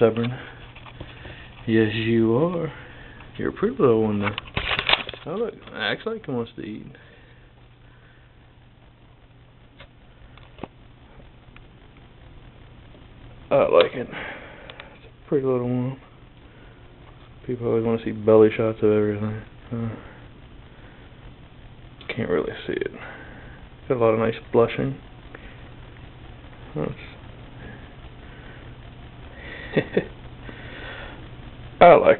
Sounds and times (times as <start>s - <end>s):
Speech: 1.7s - 2.8s, 3.4s - 4.4s, 5.2s - 7.0s, 13.5s - 14.2s, 15.3s - 16.0s, 17.4s - 20.0s, 22.0s - 23.0s, 23.9s - 25.0s, 26.7s - 27.2s, 31.8s - 32.2s.